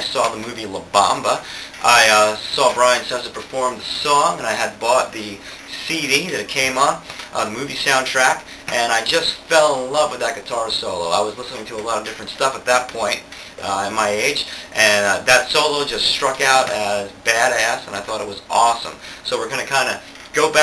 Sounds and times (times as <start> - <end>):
Speech: 0.0 - 20.6.